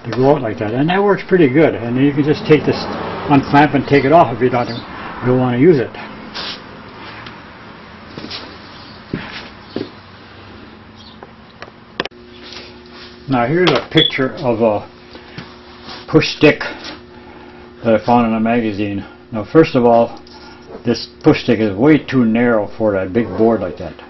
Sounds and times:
Speech: 0:00.0 - 0:06.0, 0:13.3 - 0:14.9, 0:16.1 - 0:16.8, 0:17.8 - 0:20.2, 0:20.8 - 0:24.1.

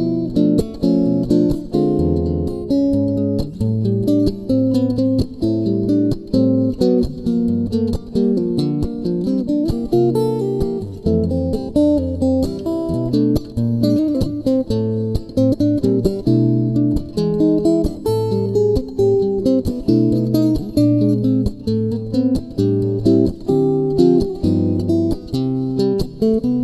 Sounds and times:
Strum: 0:00.0 - 0:26.6.

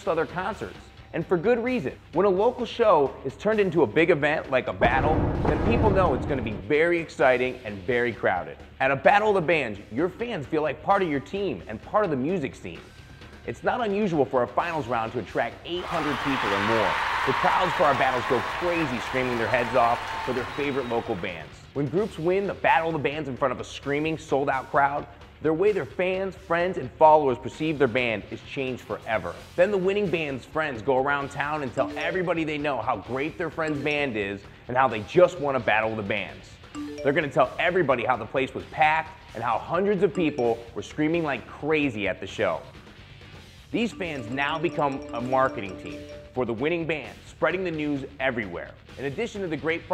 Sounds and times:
Speech: 0:00.0 - 0:12.8, 0:13.5 - 0:42.7, 0:43.8 - 0:49.9.

